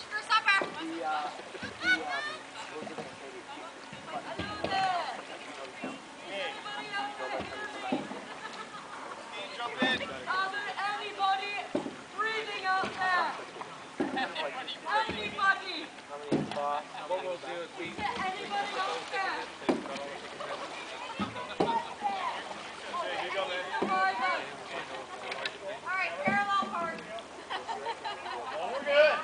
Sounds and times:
Boat, Water vehicle: 0.0s - 29.2s.

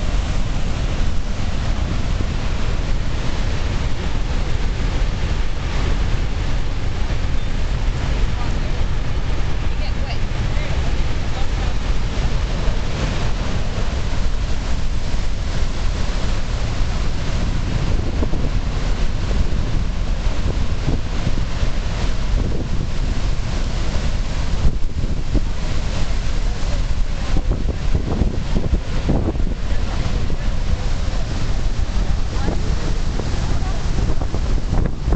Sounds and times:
Waterfall: 0.0s - 35.1s.

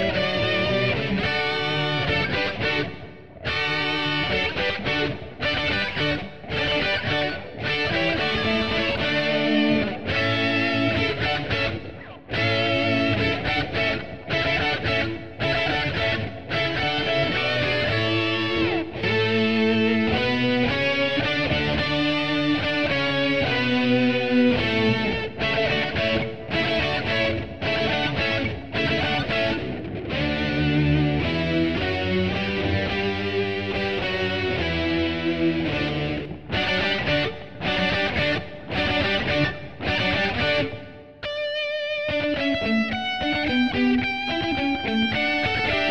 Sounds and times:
Guitar: 0.0s - 45.9s.

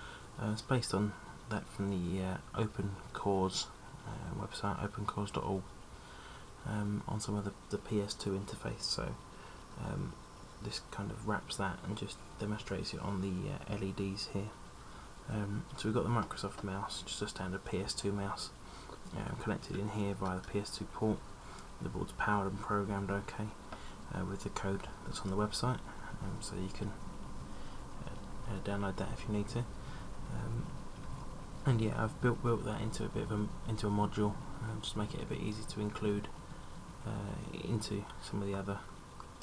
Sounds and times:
Speech: 0.4s - 5.7s, 6.6s - 9.2s, 9.8s - 14.6s, 15.3s - 21.2s, 21.8s - 27.0s, 28.0s - 29.7s, 30.3s - 30.7s, 31.6s - 36.4s, 37.0s - 38.9s.

